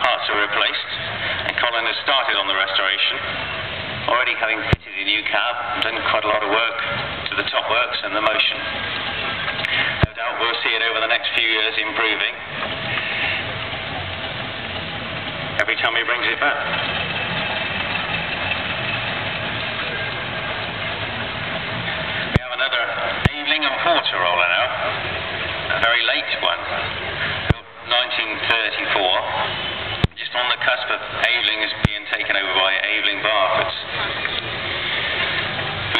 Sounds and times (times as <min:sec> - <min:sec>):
Speech: 0:00.0 - 0:03.3, 0:04.1 - 0:08.7, 0:10.0 - 0:12.4, 0:15.6 - 0:16.8, 0:22.4 - 0:25.0, 0:25.7 - 0:26.8, 0:27.5 - 0:29.5, 0:30.1 - 0:34.2
Medium engine (mid frequency): 0:00.0 - 0:35.9
Vehicle: 0:00.0 - 0:35.9.